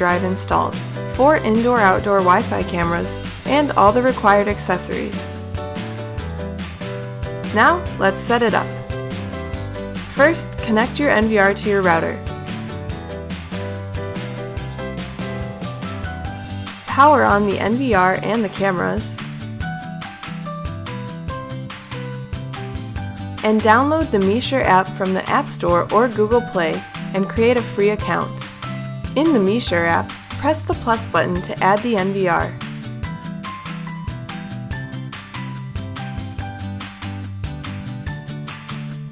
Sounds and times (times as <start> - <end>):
Speech: 0.0 - 5.2, 7.5 - 8.8, 10.2 - 12.2, 16.9 - 19.2, 23.4 - 28.4, 29.2 - 32.6
Music: 0.0 - 39.1.